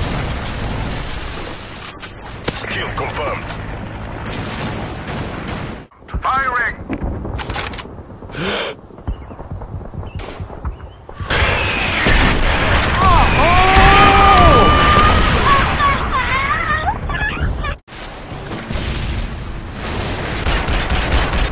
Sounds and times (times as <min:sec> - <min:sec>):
Outside, rural or natural: 0:00.0 - 0:21.5.